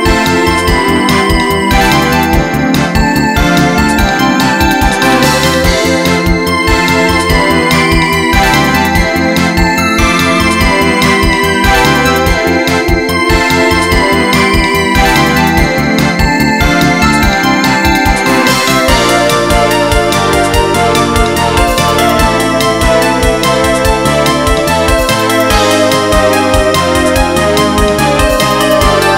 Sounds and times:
Music: 0.0s - 29.1s.

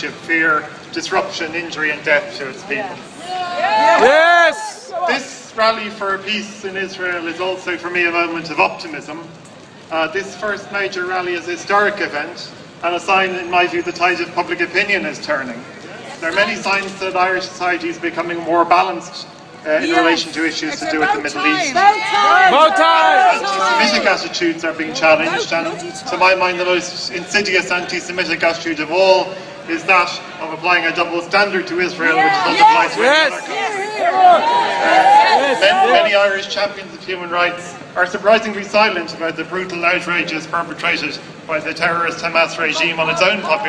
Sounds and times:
Male speech, man speaking: 0.0s - 3.0s, 3.8s - 9.3s, 9.9s - 43.6s
Female speech, woman speaking: 19.8s - 22.6s, 25.0s - 26.1s.

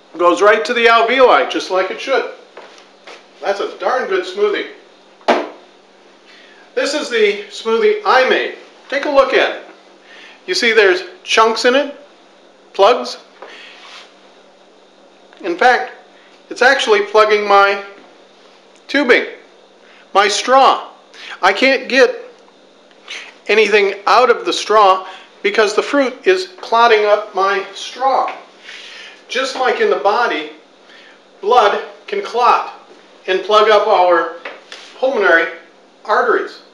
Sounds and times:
Speech: 0.1s - 2.4s, 3.4s - 4.8s, 6.8s - 9.7s, 10.5s - 12.1s, 12.7s - 13.3s, 15.4s - 18.0s, 18.9s - 19.5s, 20.1s - 22.4s, 23.4s - 28.5s, 29.3s - 30.6s, 31.4s - 34.4s, 35.0s - 36.7s.

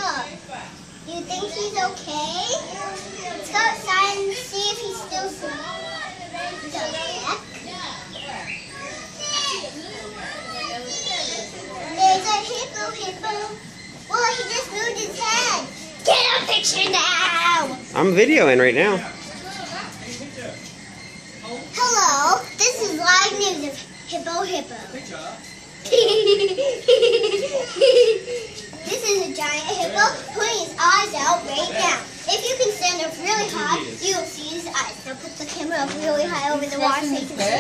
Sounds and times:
Child speech, kid speaking: 0.0s - 0.4s, 1.1s - 18.1s, 19.2s - 20.2s, 21.4s - 25.1s, 27.2s - 37.6s
Giggle: 25.8s - 28.6s
Snicker: 25.8s - 28.6s.

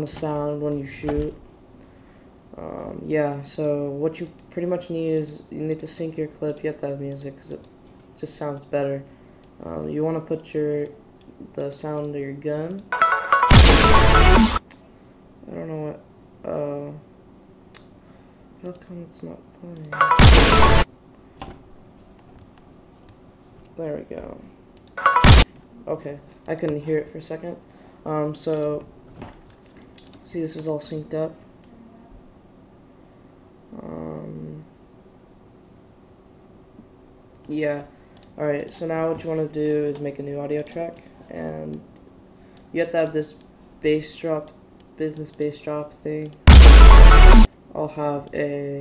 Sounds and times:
Speech: 0.0s - 1.4s, 2.6s - 7.6s, 8.2s - 12.9s, 15.4s - 17.1s, 18.6s - 20.0s, 23.8s - 24.5s, 25.8s - 28.9s, 30.2s - 32.2s, 33.7s - 34.7s, 37.5s - 41.8s, 42.7s - 46.4s, 47.7s - 48.8s
Music: 13.0s - 14.6s, 20.0s - 20.8s, 25.0s - 25.4s, 46.5s - 47.5s.

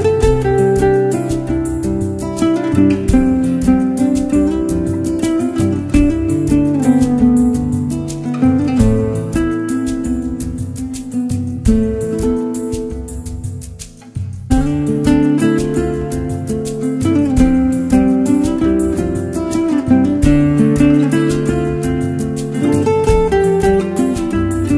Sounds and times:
Acoustic guitar: 0.0s - 24.7s.

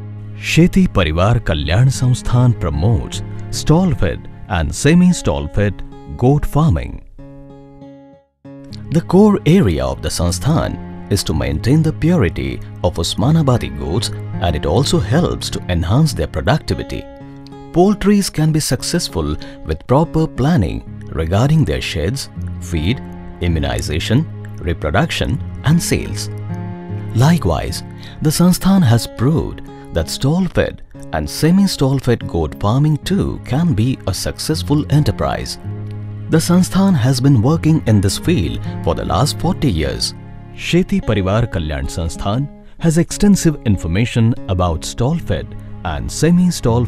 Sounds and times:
Music: 0.0s - 46.8s
Speech: 0.4s - 7.0s, 8.7s - 17.1s, 17.7s - 26.4s, 27.1s - 35.6s, 36.3s - 46.8s.

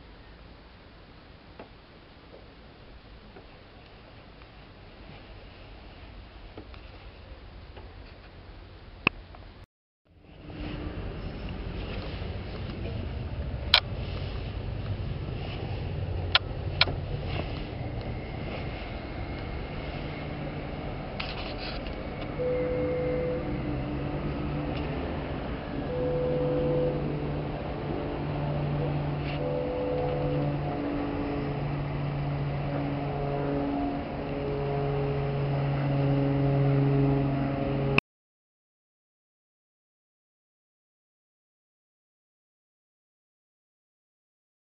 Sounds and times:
Outside, urban or manmade: 0.0s - 38.0s
Boat, Water vehicle: 10.2s - 38.0s.

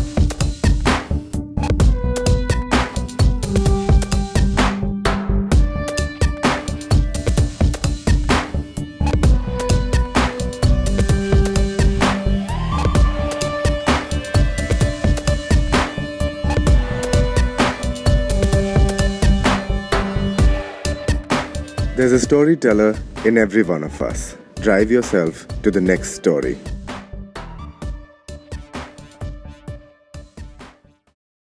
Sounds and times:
Music: 0.0s - 31.2s
Speech: 22.0s - 26.6s.

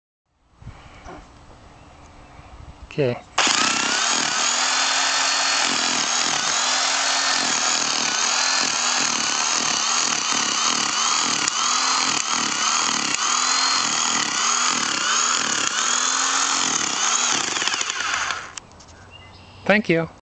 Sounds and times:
Drill: 3.4s - 18.6s.

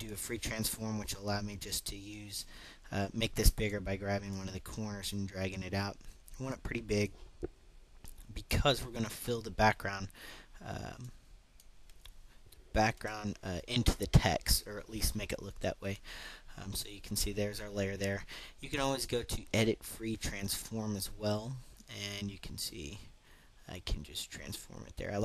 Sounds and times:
Speech: 0.0s - 7.1s, 8.2s - 11.2s, 12.7s - 23.1s, 23.7s - 25.2s.

